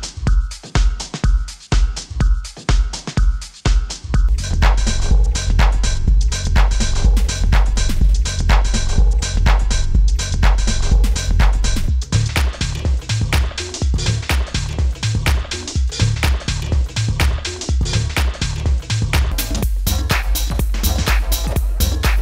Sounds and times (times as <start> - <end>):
House music: 0.0 - 22.2.